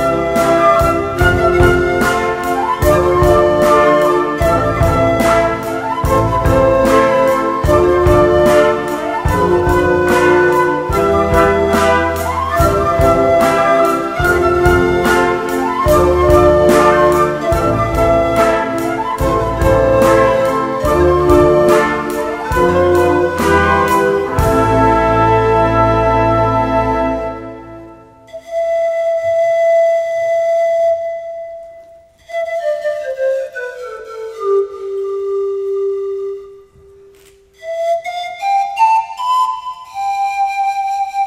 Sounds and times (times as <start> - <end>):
Flute: 0.0 - 41.2.